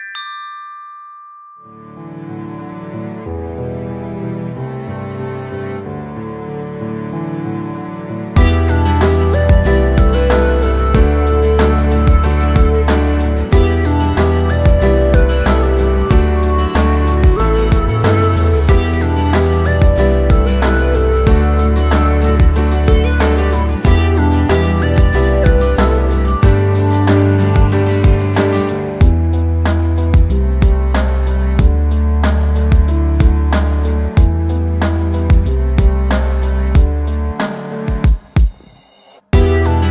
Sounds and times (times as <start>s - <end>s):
Music: 0.0s - 39.9s.